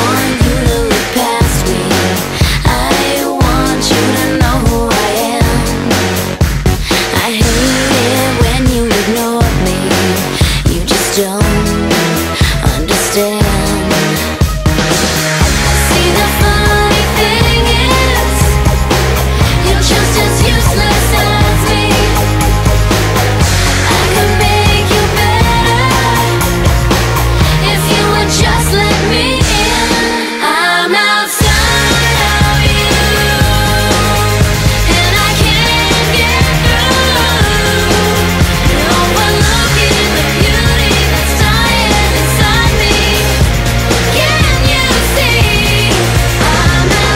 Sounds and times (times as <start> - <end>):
Music: 0.0 - 47.1.